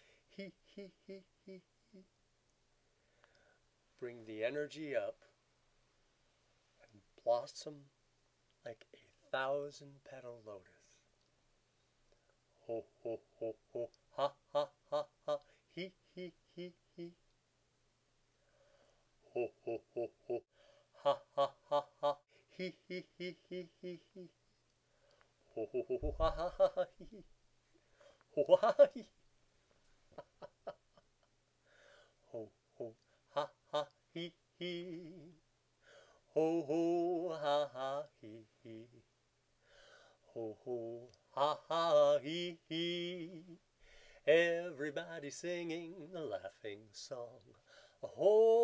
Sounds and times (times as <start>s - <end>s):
Speech: 4.0s - 5.3s, 7.1s - 7.9s, 8.7s - 11.0s.